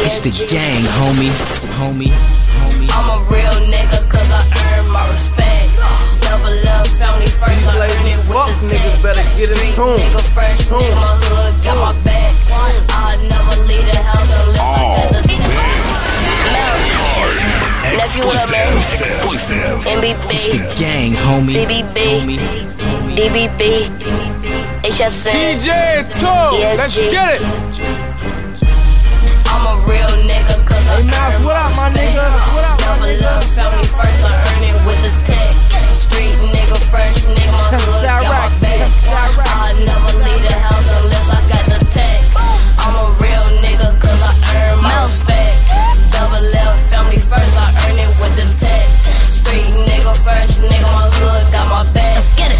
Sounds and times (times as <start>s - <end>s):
Speech: 0.0s - 2.2s, 14.6s - 15.4s, 17.8s - 22.6s, 37.8s - 39.0s
Music: 0.0s - 52.5s.